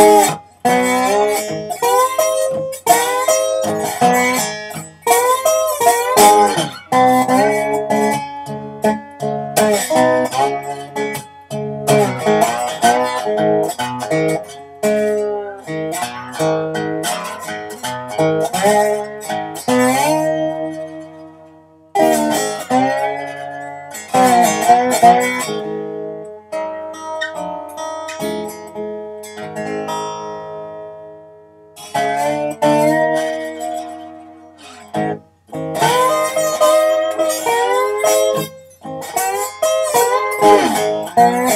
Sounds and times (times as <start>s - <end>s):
Steel guitar, slide guitar: 0.0s - 31.2s, 31.8s - 41.5s.